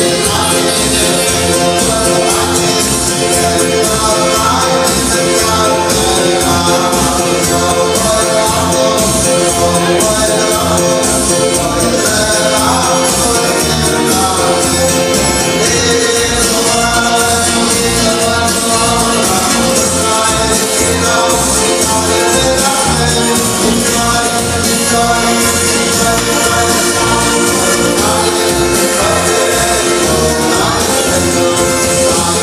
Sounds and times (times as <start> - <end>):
Male singing: 0.0 - 32.4
Music: 0.0 - 32.4.